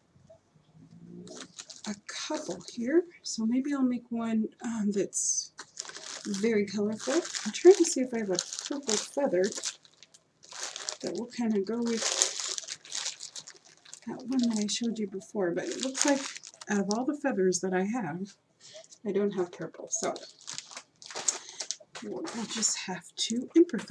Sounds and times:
Speech: 1.0 - 5.6, 6.3 - 9.6, 11.0 - 12.2, 14.1 - 18.4, 19.0 - 20.3, 22.0 - 23.9
Crumpling, crinkling: 1.3 - 3.0, 5.5 - 17.2, 18.6 - 23.9.

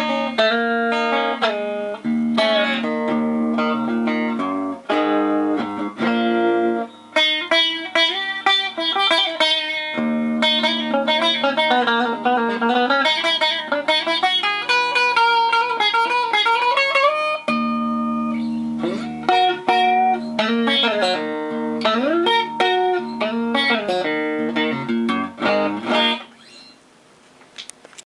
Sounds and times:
Guitar: 0.0 - 28.0.

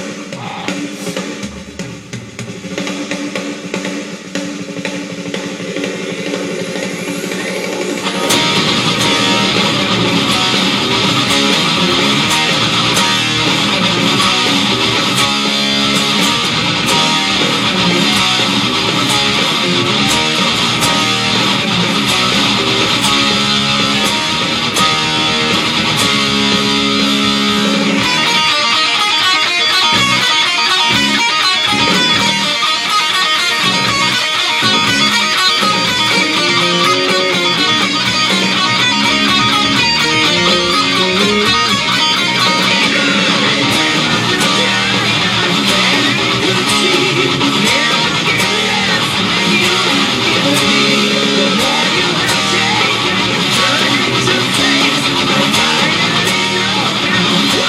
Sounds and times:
Electric guitar: 0.0 - 57.6
Strum: 6.4 - 57.6.

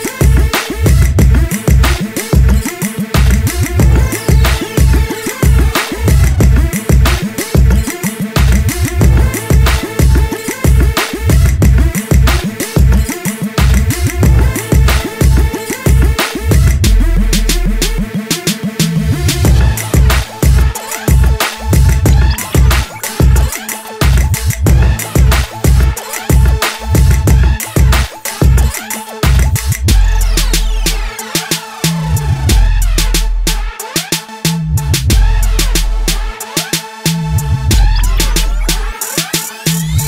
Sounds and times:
Music: 0.0 - 40.0.

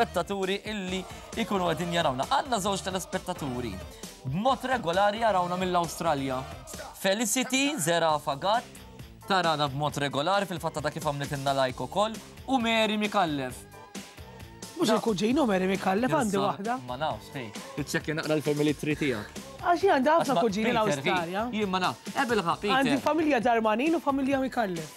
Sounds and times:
Speech: 0.0 - 8.6, 14.8 - 24.9
Music: 0.0 - 24.9.

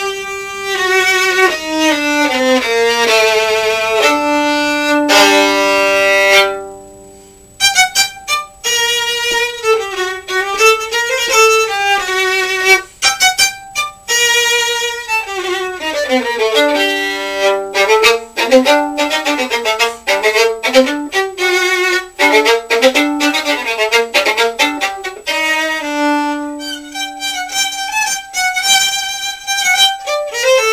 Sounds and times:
Violin, fiddle: 0.0 - 6.9, 7.6 - 30.7.

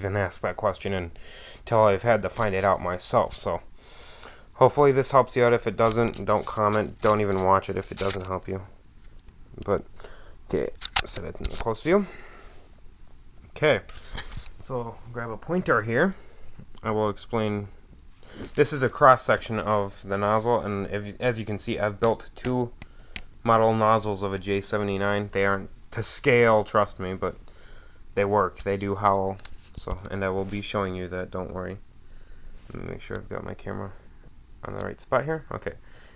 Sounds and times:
Speech: 0.0 - 3.7, 4.6 - 8.7, 9.6 - 9.9, 10.5 - 12.2, 13.6 - 13.9, 14.6 - 16.2, 16.8 - 17.7, 18.6 - 22.8, 23.4 - 27.4, 28.2 - 31.8, 32.7 - 34.0, 34.6 - 35.8.

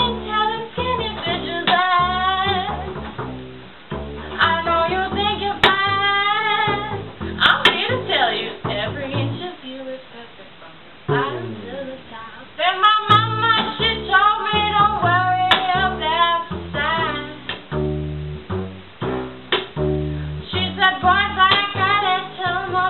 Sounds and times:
Double bass: 0.0 - 10.0, 10.8 - 22.9.

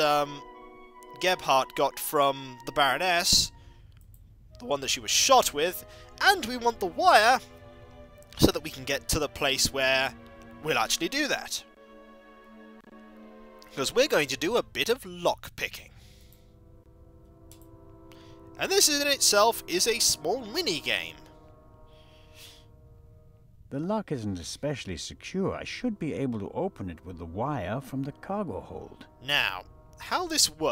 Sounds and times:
Speech: 0.0 - 0.4, 1.1 - 3.5, 4.6 - 7.4, 8.4 - 11.7, 13.7 - 16.0, 18.6 - 21.2, 23.7 - 30.7
Music: 0.0 - 30.7.

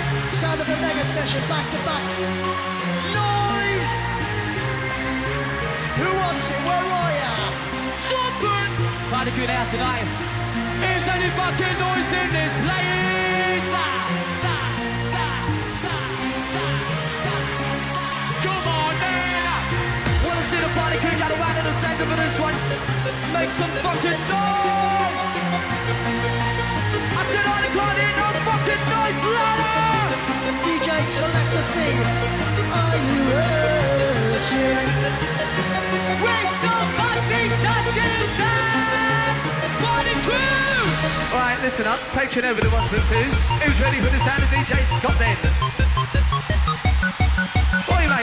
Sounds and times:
Techno: 0.0 - 48.2.

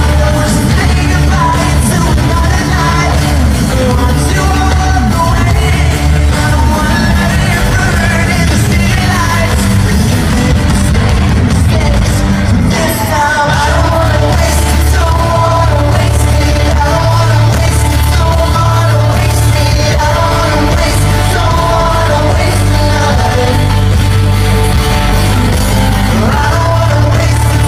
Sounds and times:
Inside, large room or hall: 0.0 - 27.6
Music: 0.0 - 27.6
Singing: 0.0 - 27.6.

